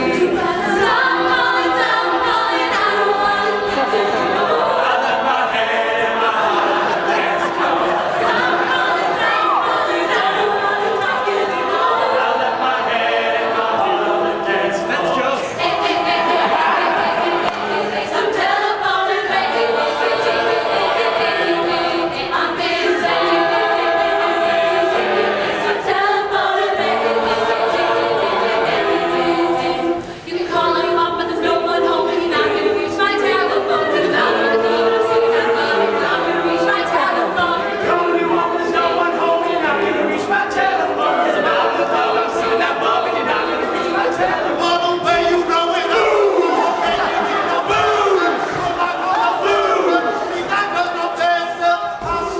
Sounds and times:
Choir: 0:00.0 - 0:52.3
Inside, large room or hall: 0:00.0 - 0:52.3.

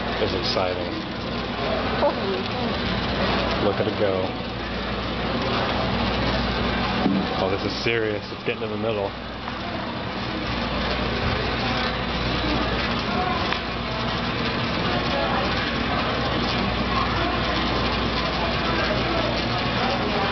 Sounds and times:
Speech: 0:00.0 - 0:04.4, 0:07.2 - 0:20.3.

